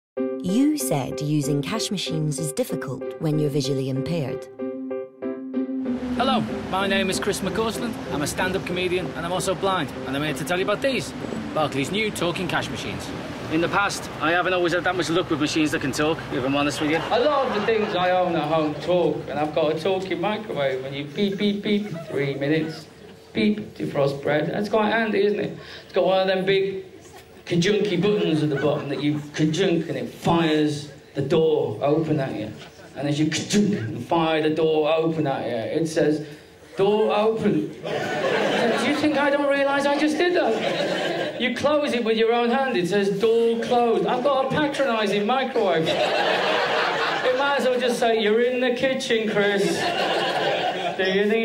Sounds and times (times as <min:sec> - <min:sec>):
Music: 0:00.2 - 0:13.1
Speech: 0:00.5 - 0:04.4, 0:06.2 - 0:26.8, 0:36.8 - 0:37.8, 0:38.6 - 0:40.6, 0:41.4 - 0:45.9, 0:47.2 - 0:49.8, 0:51.0 - 0:51.4
Outside, urban or manmade: 0:06.0 - 0:24.7.